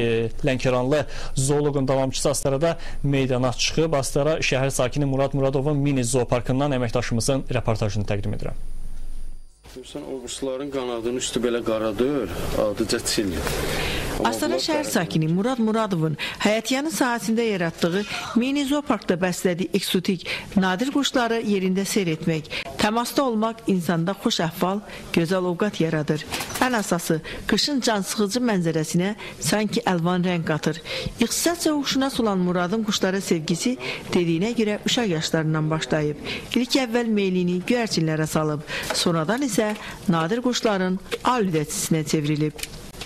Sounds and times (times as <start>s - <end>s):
Speech: 9.7s - 13.4s, 14.2s - 42.6s.